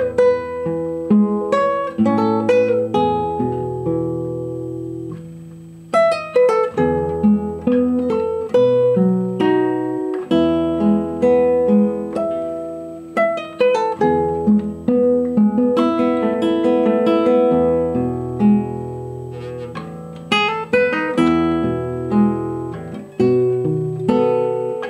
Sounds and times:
Acoustic guitar: 0.0 - 24.8
Strum: 0.0 - 24.8.

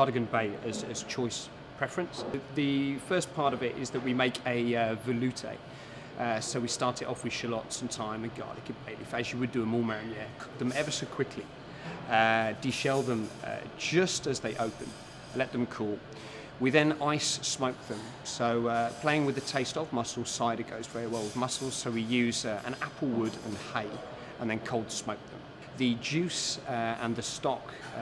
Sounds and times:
Speech: 0.0 - 5.6, 6.2 - 11.5, 12.1 - 16.0, 16.6 - 28.0.

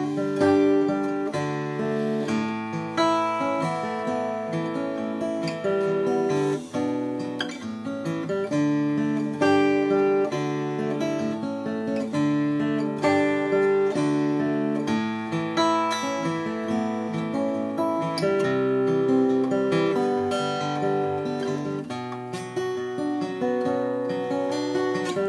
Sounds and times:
Acoustic guitar: 0.0 - 25.2.

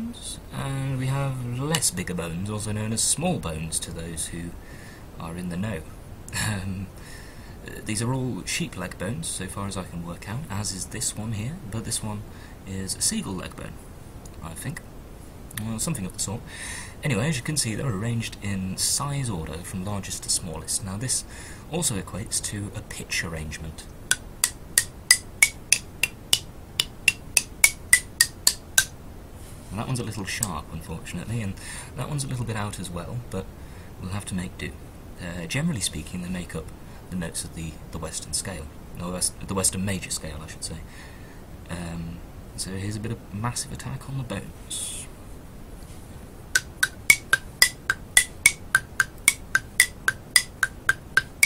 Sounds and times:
Speech: 0.0 - 4.6, 5.2 - 6.9, 7.6 - 14.8, 15.5 - 23.9, 29.7 - 40.9, 41.6 - 45.2.

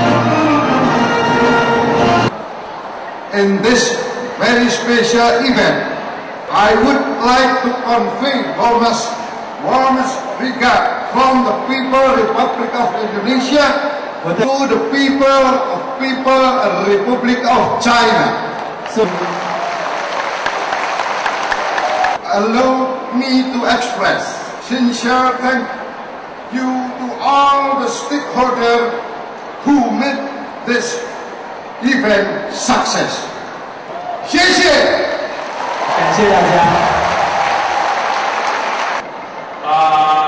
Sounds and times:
Speech: 3.3 - 5.9, 6.5 - 19.5, 22.2 - 25.8, 26.5 - 29.0, 29.6 - 31.1, 31.8 - 33.3, 34.3 - 35.2, 36.0 - 36.9.

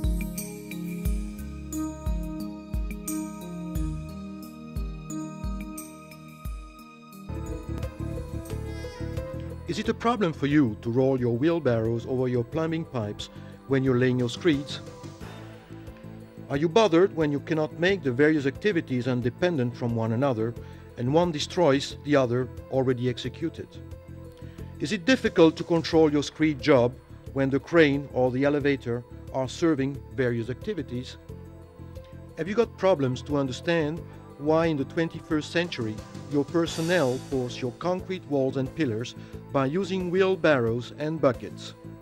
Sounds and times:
Music: 0.0 - 42.0
Speech: 9.7 - 14.9, 16.5 - 23.8, 24.8 - 31.2, 32.4 - 41.8.

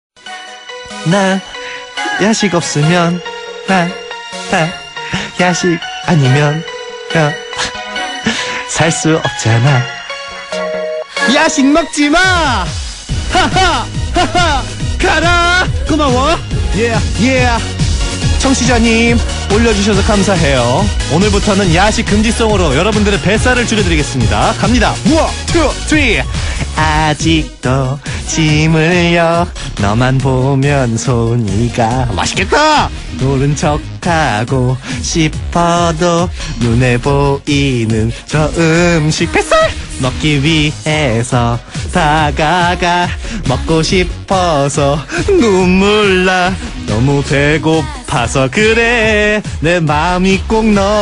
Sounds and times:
Funny music: 0.2 - 51.0.

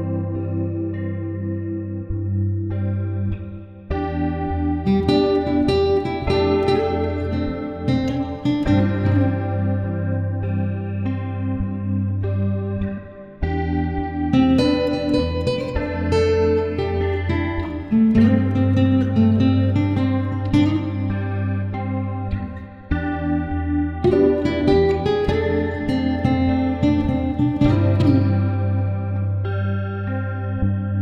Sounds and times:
Music: 0.0 - 31.0.

